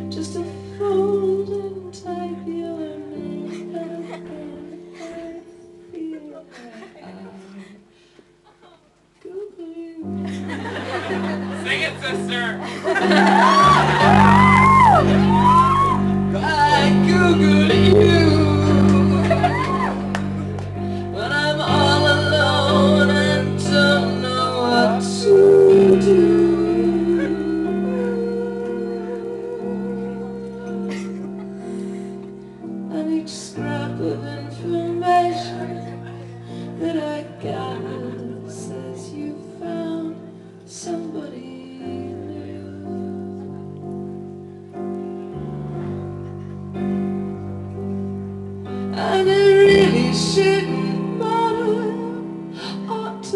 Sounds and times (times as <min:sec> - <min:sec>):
Inside, large room or hall: 0:00.0 - 0:53.3
Music: 0:00.0 - 0:53.3
Humming: 0:13.0 - 0:32.2
Singing: 0:21.2 - 0:31.1, 0:48.9 - 0:53.3.